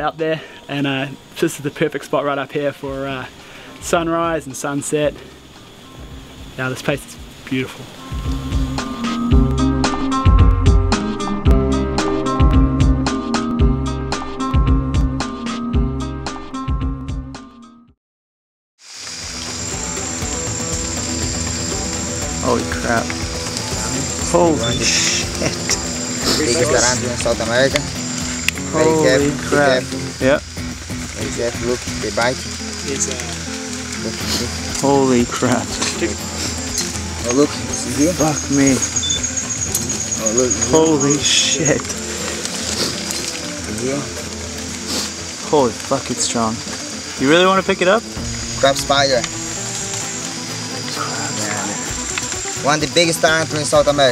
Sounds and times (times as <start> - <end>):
Speech: 0.0 - 5.2, 6.6 - 7.8, 22.4 - 23.1, 23.9 - 25.3, 26.2 - 27.9, 28.7 - 30.4, 31.2 - 33.4, 34.0 - 36.2, 40.2 - 41.9, 52.6 - 54.1
Outside, rural or natural: 0.0 - 17.6, 18.8 - 54.1
Music: 0.0 - 18.0, 19.0 - 54.1.